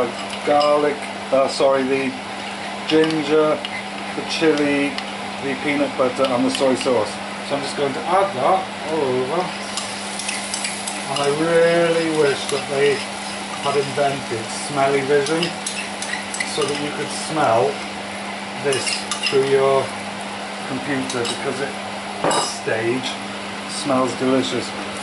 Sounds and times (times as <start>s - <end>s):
Sizzle: 0.0s - 25.0s.